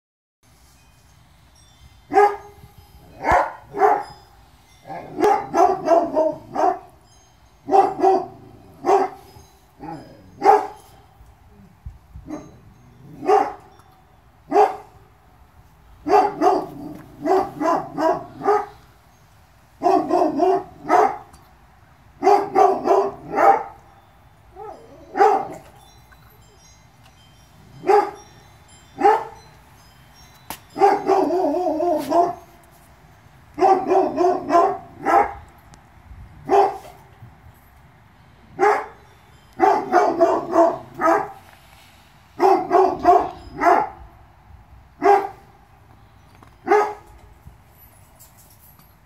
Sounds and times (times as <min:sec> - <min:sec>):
Bark: 0:02.1 - 0:02.5, 0:03.2 - 0:04.1, 0:05.0 - 0:06.9, 0:07.7 - 0:09.2, 0:10.4 - 0:10.8, 0:13.2 - 0:13.7, 0:14.5 - 0:14.9, 0:16.1 - 0:18.8, 0:19.8 - 0:21.3, 0:22.2 - 0:23.8, 0:24.6 - 0:25.6, 0:27.8 - 0:28.2, 0:29.0 - 0:29.4, 0:30.8 - 0:32.4, 0:33.6 - 0:35.4, 0:36.5 - 0:37.0, 0:38.6 - 0:39.0, 0:39.6 - 0:41.4, 0:42.4 - 0:44.0, 0:45.0 - 0:45.4, 0:46.7 - 0:47.1
Bow-wow: 0:16.1 - 0:18.7, 0:19.8 - 0:21.2, 0:39.6 - 0:41.4, 0:42.4 - 0:43.9.